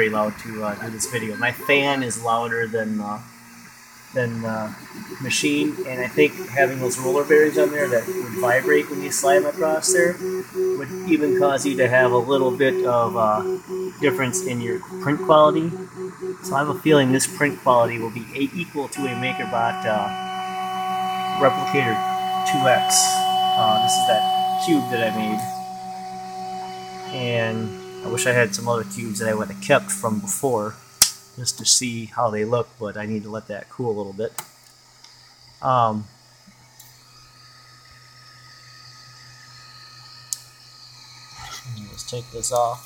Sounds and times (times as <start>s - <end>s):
Speech: 0.0s - 3.2s, 4.2s - 10.2s, 10.8s - 15.8s, 16.4s - 20.1s, 21.4s - 25.6s, 27.1s - 30.8s, 31.4s - 34.4s, 35.6s - 36.1s, 41.5s - 42.8s
Printer: 3.4s - 30.6s.